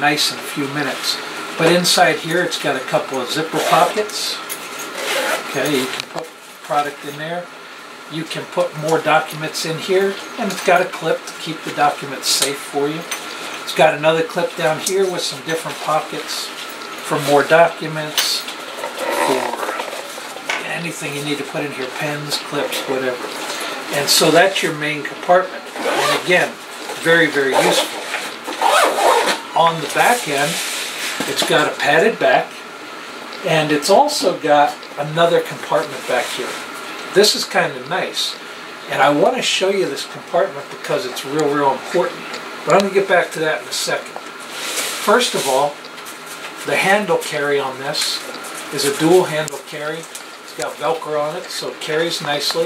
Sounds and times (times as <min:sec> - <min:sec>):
Speech: 0:00.0 - 0:04.4, 0:05.5 - 0:07.5, 0:08.1 - 0:18.5, 0:19.2 - 0:19.7, 0:20.5 - 0:28.0, 0:29.6 - 0:30.6, 0:31.2 - 0:32.6, 0:33.4 - 0:44.2, 0:45.0 - 0:45.9, 0:46.6 - 0:52.6.